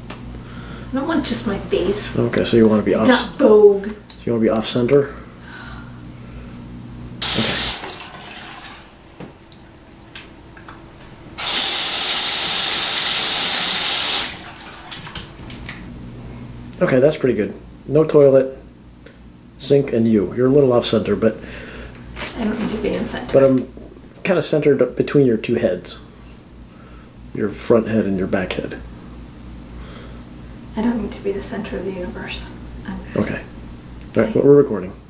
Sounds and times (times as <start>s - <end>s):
Sink (filling or washing): 7.2s - 9.0s, 11.4s - 15.3s
Water tap, faucet: 7.2s - 9.0s, 11.4s - 15.3s
Water: 7.5s - 9.0s, 14.3s - 15.3s.